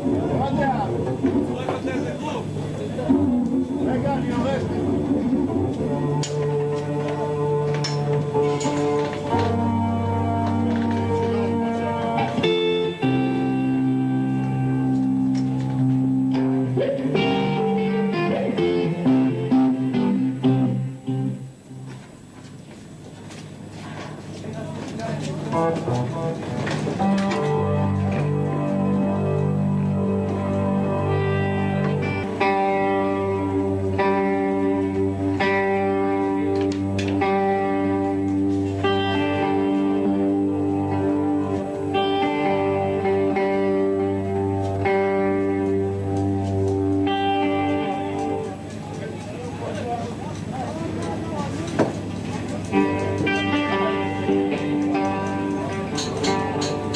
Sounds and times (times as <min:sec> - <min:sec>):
Music: 0:00.0 - 0:56.9
Speech: 0:00.2 - 0:03.2, 0:03.8 - 0:04.9, 0:23.8 - 0:25.8, 0:48.6 - 0:52.8.